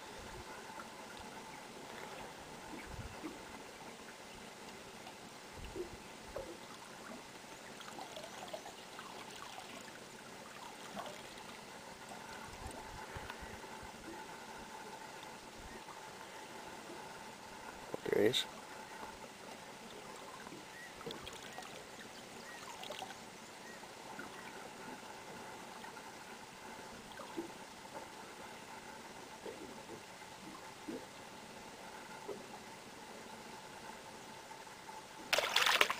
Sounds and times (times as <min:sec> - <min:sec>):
Liquid: 0:00.0 - 0:35.9
Water: 0:00.0 - 0:35.9.